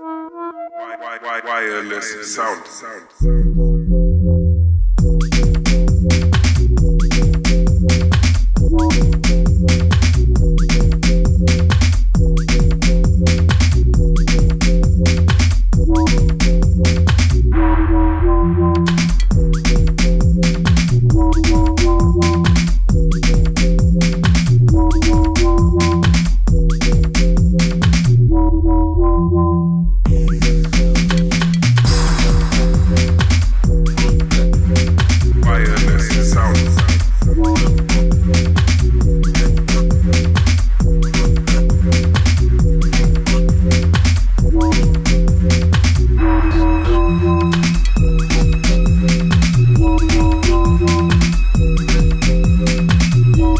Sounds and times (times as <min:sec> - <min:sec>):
Music: 0:00.0 - 0:53.5.